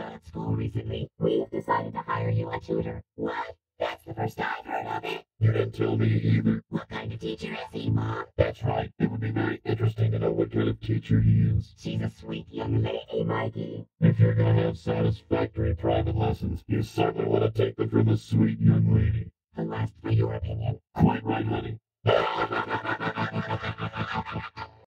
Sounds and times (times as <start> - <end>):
Speech: 0.0 - 24.9.